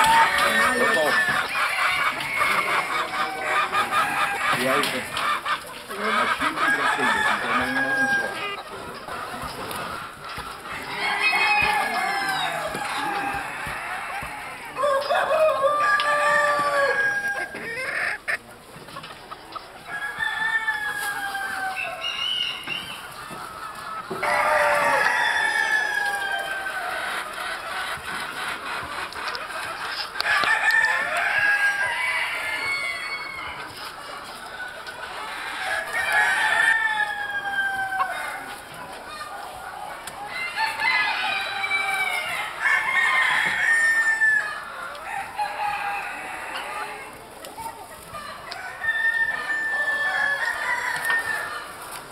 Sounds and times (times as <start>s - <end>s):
Chicken, rooster: 0.0s - 52.1s
Speech: 0.1s - 1.4s, 5.9s - 8.6s.